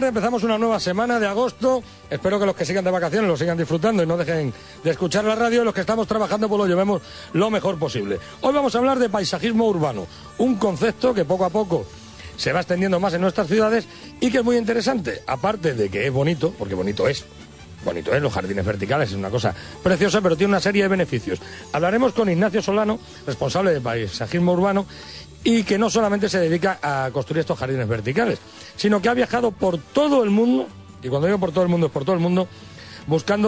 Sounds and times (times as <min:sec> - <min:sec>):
Speech: 0:00.0 - 0:32.5, 0:33.1 - 0:33.4
Music: 0:00.0 - 0:33.4.